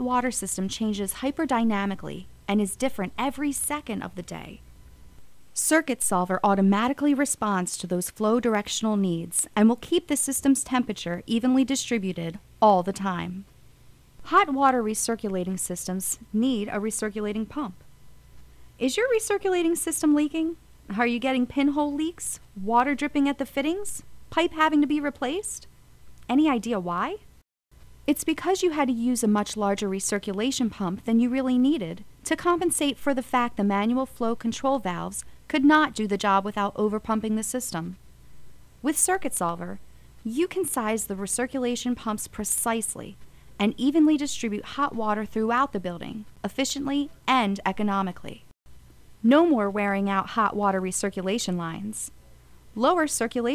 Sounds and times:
Narration, monologue: 0:00.0 - 0:53.5.

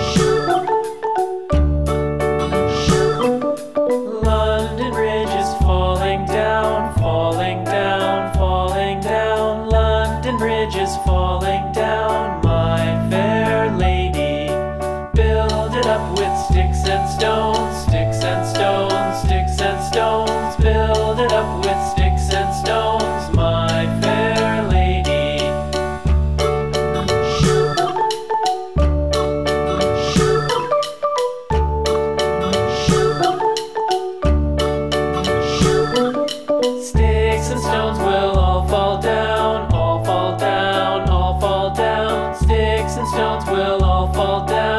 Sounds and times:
Music: 0:00.0 - 0:44.7.

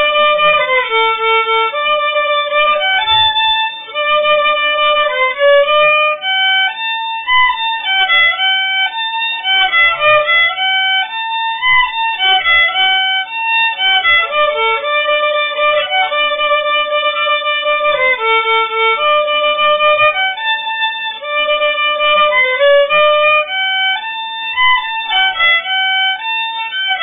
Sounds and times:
Violin, fiddle: 0:00.0 - 0:27.0.

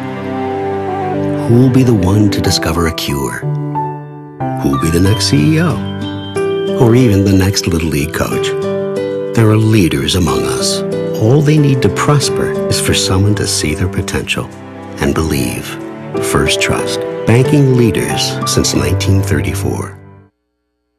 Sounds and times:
Music: 0:00.0 - 0:20.4
Speech: 0:01.4 - 0:03.5, 0:04.6 - 0:05.8, 0:06.8 - 0:08.6, 0:09.4 - 0:20.0.

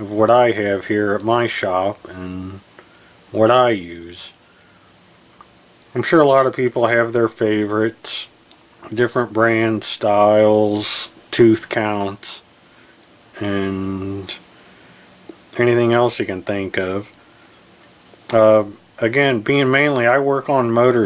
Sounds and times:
Speech: 0:00.0 - 0:02.7, 0:03.3 - 0:04.4, 0:05.9 - 0:12.5, 0:13.4 - 0:14.5, 0:15.5 - 0:17.2, 0:18.3 - 0:21.0.

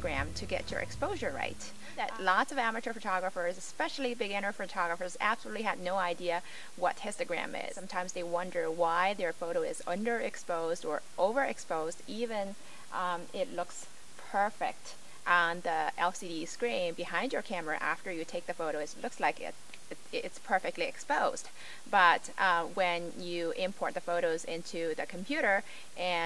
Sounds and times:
Speech: 0:00.0 - 0:26.2.

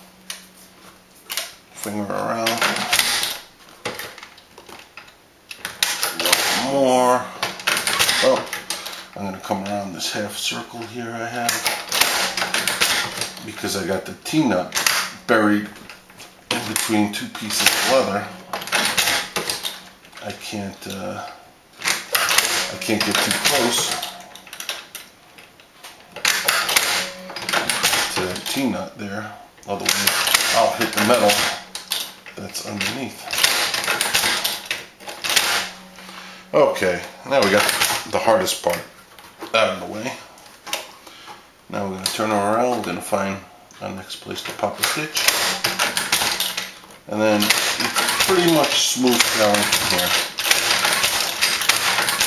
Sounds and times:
Speech: 0:01.8 - 0:02.9, 0:06.2 - 0:07.3, 0:08.2 - 0:08.5, 0:09.2 - 0:11.6, 0:13.4 - 0:15.8, 0:16.5 - 0:18.4, 0:20.2 - 0:21.3, 0:22.6 - 0:24.2, 0:28.1 - 0:31.6, 0:32.4 - 0:33.2, 0:36.5 - 0:38.9, 0:39.5 - 0:40.3, 0:41.7 - 0:45.2, 0:47.1 - 0:50.2
Sewing machine: 0:02.4 - 0:04.2, 0:05.6 - 0:09.2, 0:11.4 - 0:13.8, 0:16.5 - 0:19.9, 0:21.8 - 0:24.8, 0:26.2 - 0:28.7, 0:29.8 - 0:32.2, 0:32.8 - 0:36.0, 0:37.4 - 0:38.2, 0:44.5 - 0:52.2.

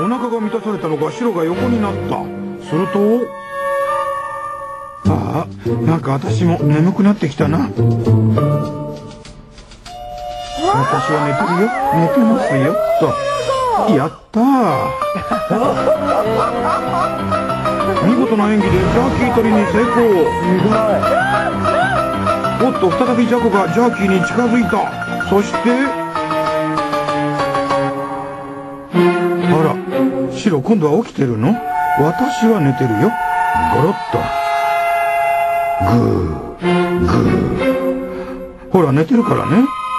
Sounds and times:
Music: 0:00.0 - 0:39.9.

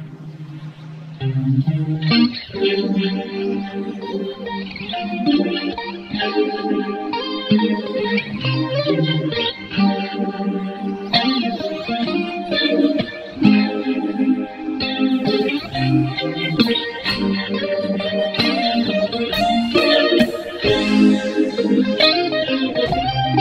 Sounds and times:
Music: 0:00.0 - 0:23.4.

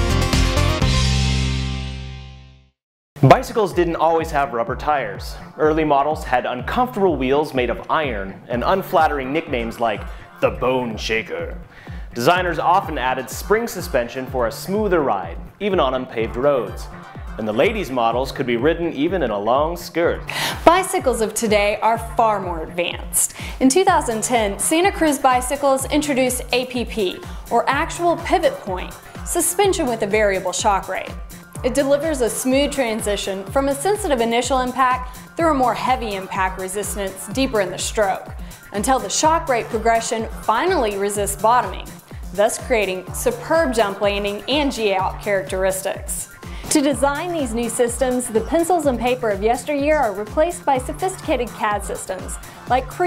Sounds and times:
Music: 0:00.0 - 0:53.0
Speech: 0:03.2 - 0:11.6, 0:12.2 - 0:53.0.

